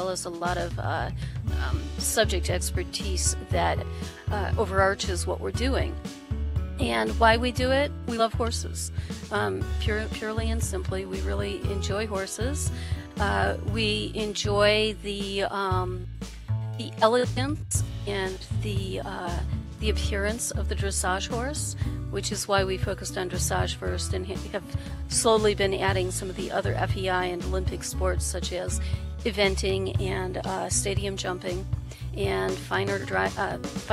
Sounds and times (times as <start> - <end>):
Speech: 0.0 - 6.0, 6.8 - 16.1, 16.8 - 31.6, 32.2 - 33.9
Music: 0.0 - 33.9.